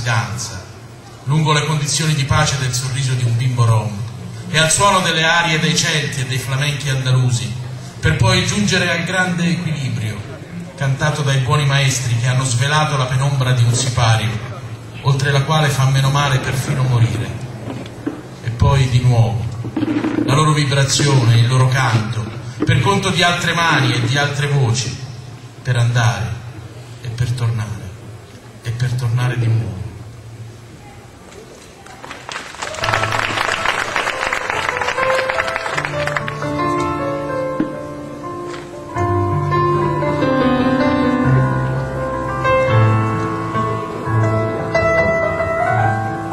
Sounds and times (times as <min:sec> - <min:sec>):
Speech: 0:00.0 - 0:17.4, 0:20.3 - 0:25.0, 0:27.0 - 0:28.0, 0:28.6 - 0:29.9.